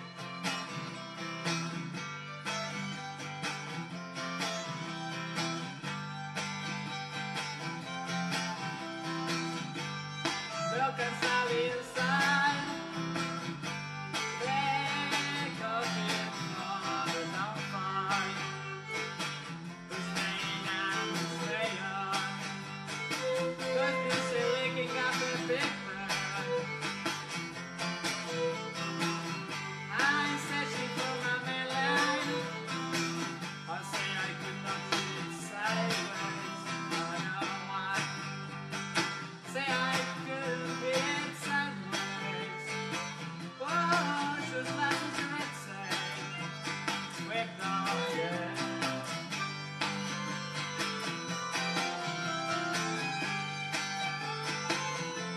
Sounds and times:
Violin, fiddle: 0.0 - 55.3.

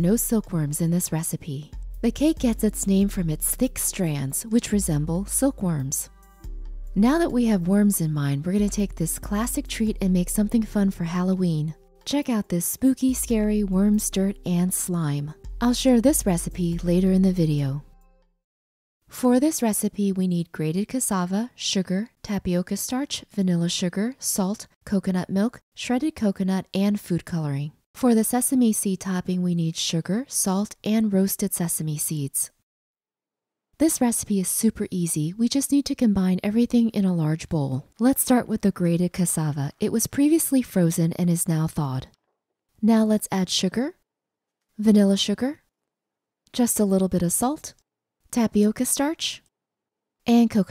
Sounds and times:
Speech: 0.0 - 6.1, 7.0 - 17.9, 19.1 - 32.5, 33.8 - 42.2, 42.8 - 44.0, 44.8 - 45.7, 46.5 - 49.5, 50.3 - 50.7.

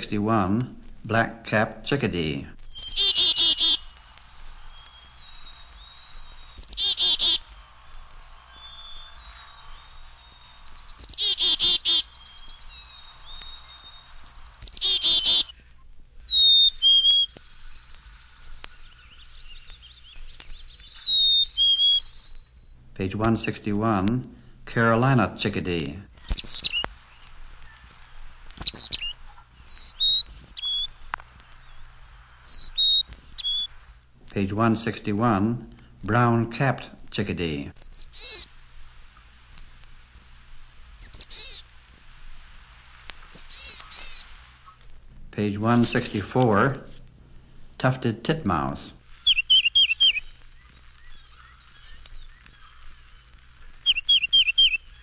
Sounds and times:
Chirp, tweet: 2.6 - 4.0, 4.7 - 15.5, 16.3 - 22.8, 26.2 - 27.9, 28.5 - 30.9, 31.6 - 33.7, 37.8 - 38.5, 40.1 - 41.6, 43.2 - 44.2, 49.3 - 55.0.

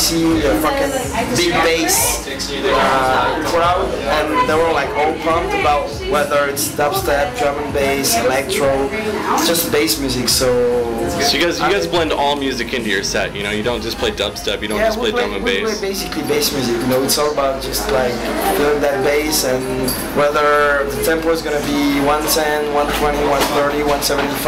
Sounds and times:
Speech: 0.0 - 24.4.

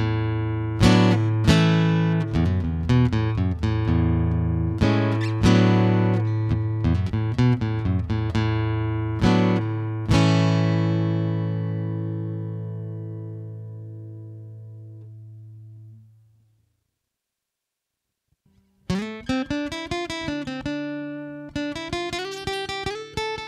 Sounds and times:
Acoustic guitar: 0.0 - 16.4, 18.4 - 23.4.

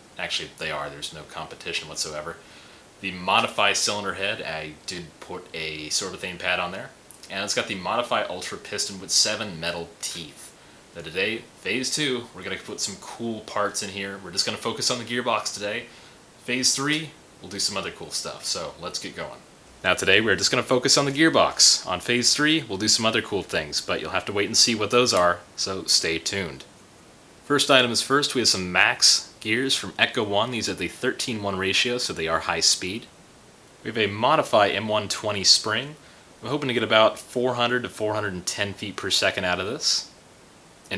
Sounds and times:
Speech: 0.2 - 2.4, 3.0 - 26.7, 27.4 - 33.2, 33.8 - 40.2.

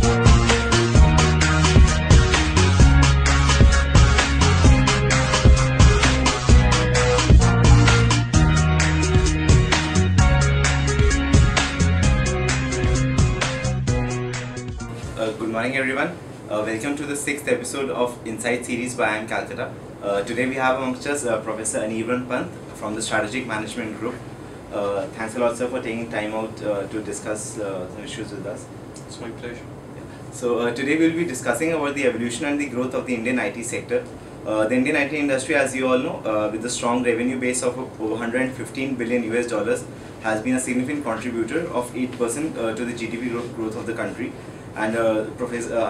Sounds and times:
Speech: 15.2 - 29.7, 30.4 - 45.9.

